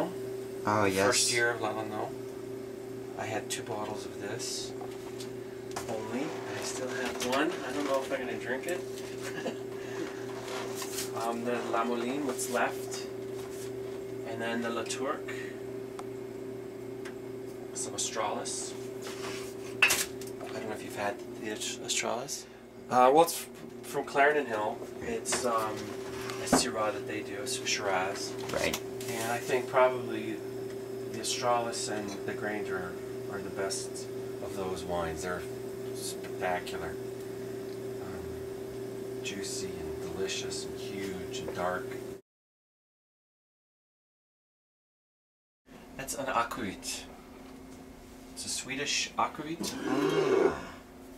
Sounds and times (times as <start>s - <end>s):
Speech: 0.0s - 2.2s, 3.2s - 4.8s, 5.8s - 8.8s, 11.1s - 13.1s, 14.2s - 15.5s, 17.7s - 18.8s, 20.4s - 30.4s, 31.1s - 37.0s, 38.0s - 38.4s, 39.2s - 42.0s, 46.0s - 47.1s, 48.4s - 49.8s.